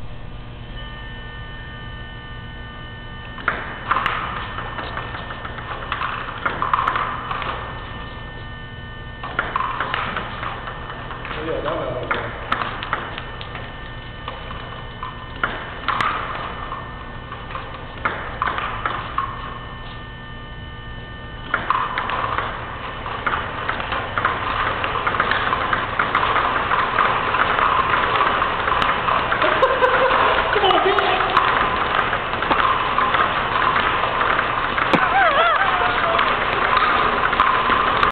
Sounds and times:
Speech: 0:11.4 - 0:12.2, 0:30.5 - 0:31.5.

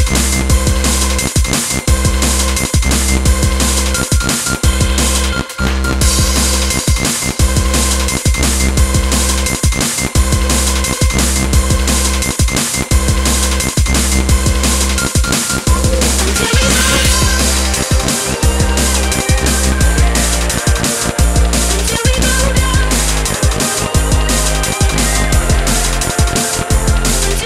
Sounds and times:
Drum and bass: 0:00.0 - 0:27.4.

